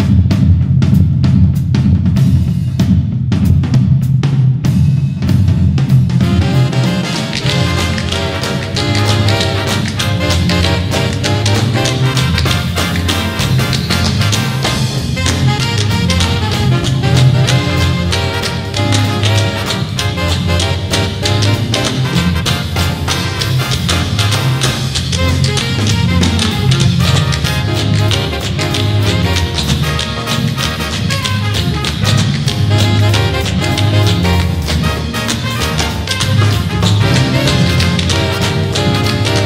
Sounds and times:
Swing music: 0:00.0 - 0:39.4.

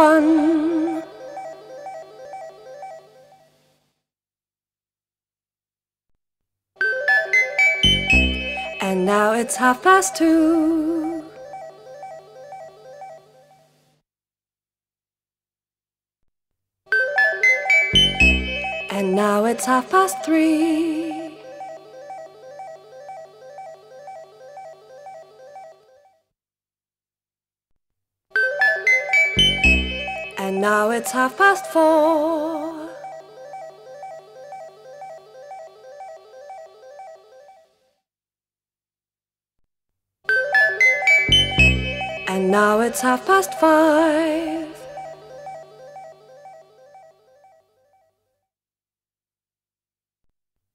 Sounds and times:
Female singing: 0:00.0 - 0:01.2, 0:08.8 - 0:11.4, 0:18.9 - 0:21.5, 0:30.4 - 0:33.0, 0:42.3 - 0:44.9
Music: 0:06.8 - 0:10.2, 0:16.9 - 0:25.3, 0:28.4 - 0:31.7, 0:40.3 - 0:43.6.

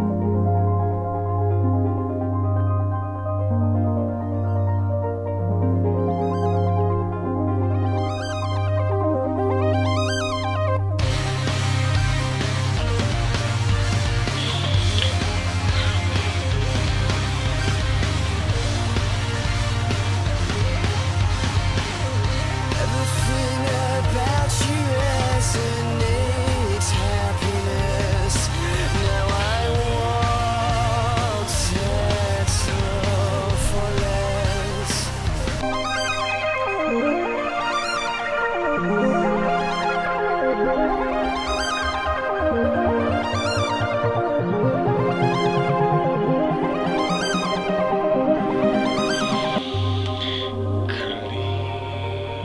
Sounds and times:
Music: 0:00.0 - 0:52.4.

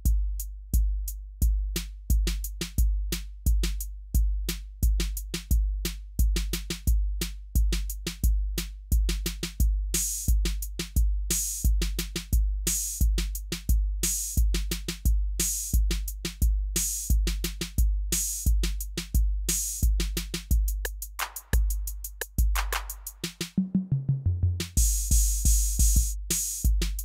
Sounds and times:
Drum machine: 0:00.0 - 0:27.0.

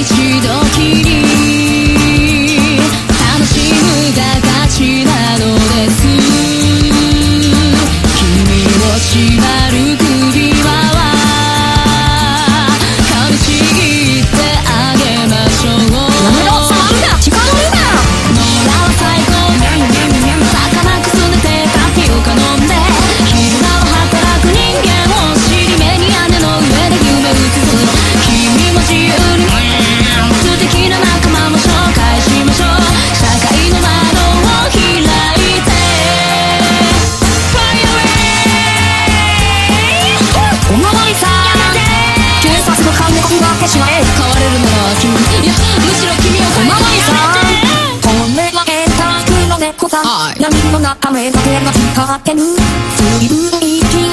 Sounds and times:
Music: 0:00.0 - 0:54.1
Speech: 0:15.9 - 0:18.1, 0:39.4 - 0:48.6.

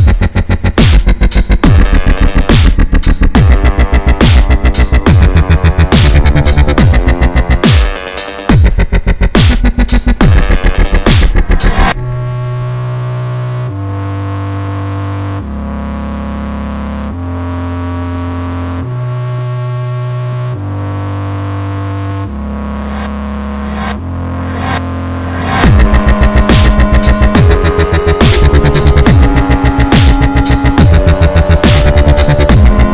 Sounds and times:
Dubstep: 0:00.0 - 0:32.9.

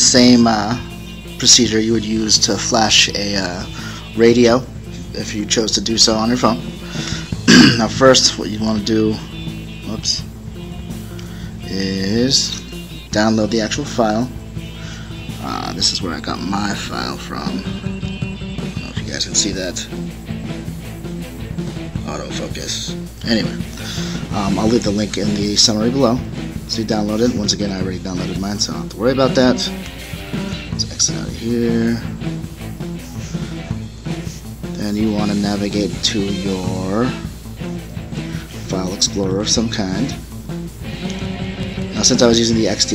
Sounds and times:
Speech: 0:00.0 - 0:00.8, 0:01.4 - 0:06.7, 0:07.5 - 0:09.2, 0:09.9 - 0:10.3, 0:11.6 - 0:14.3, 0:15.4 - 0:17.7, 0:18.8 - 0:19.9, 0:22.0 - 0:23.7, 0:24.3 - 0:29.8, 0:30.8 - 0:32.2, 0:34.8 - 0:37.3, 0:38.6 - 0:40.2, 0:41.9 - 0:42.9
Music: 0:00.0 - 0:42.9.

